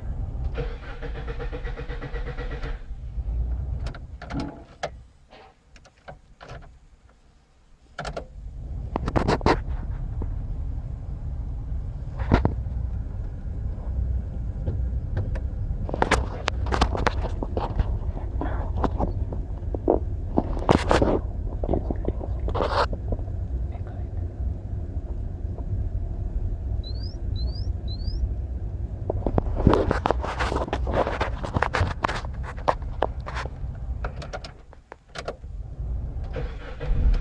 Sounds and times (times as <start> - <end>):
Car: 0.0 - 37.2.